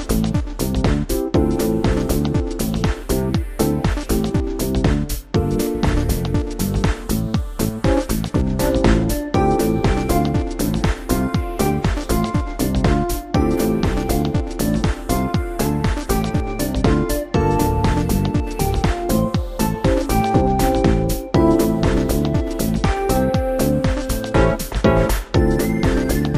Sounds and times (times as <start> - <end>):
Music: 0.0 - 26.3.